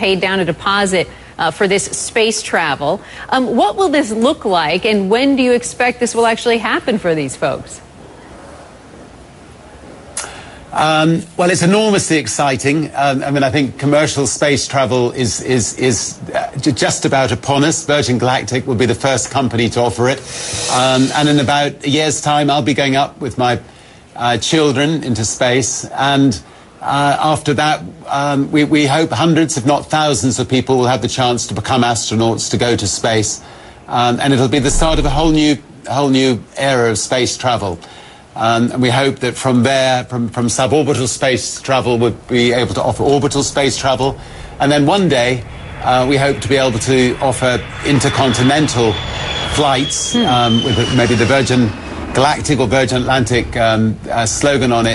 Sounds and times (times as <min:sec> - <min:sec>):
Speech: 0:10.8 - 0:23.6, 0:24.2 - 0:37.8, 0:38.4 - 0:54.9.